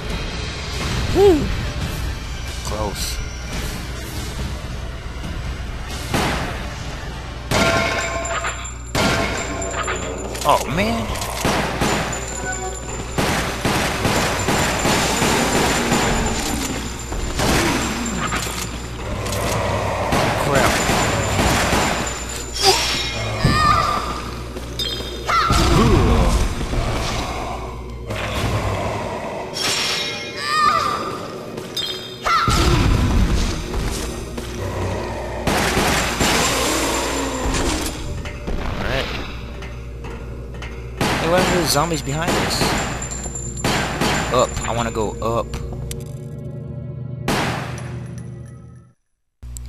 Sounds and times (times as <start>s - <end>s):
Music: 0.0s - 49.6s.